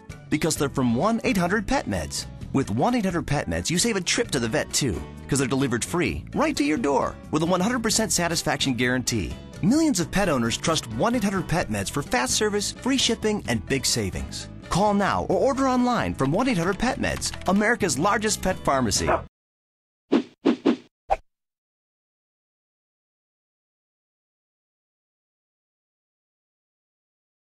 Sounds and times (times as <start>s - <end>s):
Music: 0.0s - 19.2s
Speech: 0.3s - 19.2s
Bow-wow: 19.1s - 19.3s.